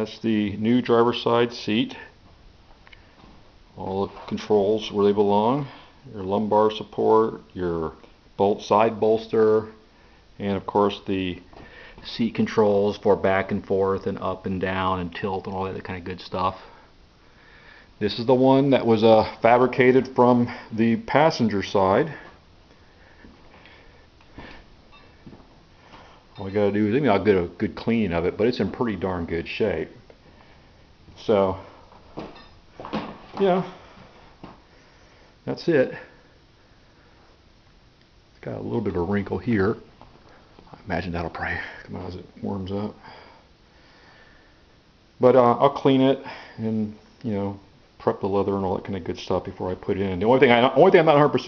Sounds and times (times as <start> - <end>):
Speech: 0.0 - 2.2, 3.8 - 9.8, 10.4 - 16.8, 18.0 - 22.3, 26.4 - 30.0, 31.2 - 31.7, 33.4 - 33.8, 35.4 - 36.2, 38.4 - 39.9, 40.8 - 43.0, 45.2 - 51.4.